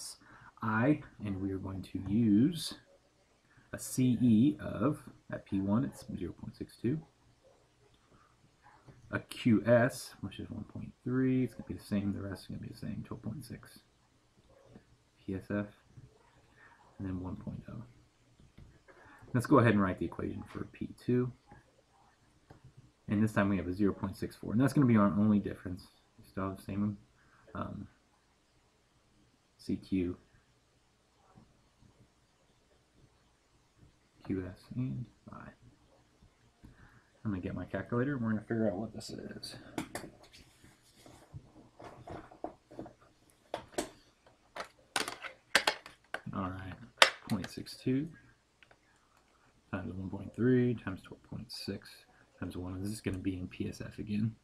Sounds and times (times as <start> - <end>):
Speech: 0.0 - 2.9, 3.8 - 7.1, 9.1 - 13.9, 15.2 - 15.8, 17.0 - 17.9, 19.2 - 21.4, 23.1 - 28.0, 29.6 - 30.2, 34.2 - 35.6, 37.2 - 39.8, 46.2 - 48.2, 49.7 - 54.4.